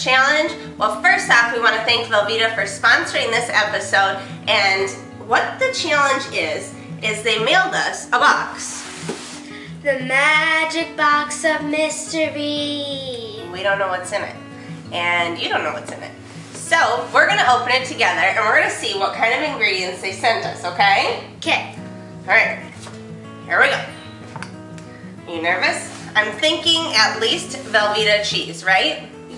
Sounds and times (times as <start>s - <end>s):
Music: 0.0s - 29.3s
Speech: 15.0s - 22.6s, 25.3s - 29.0s.